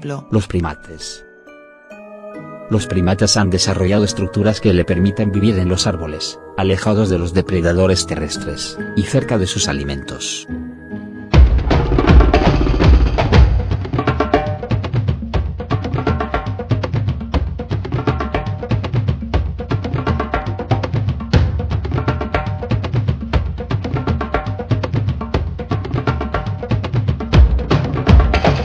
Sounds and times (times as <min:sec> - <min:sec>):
Music: 0:00.0 - 0:28.6.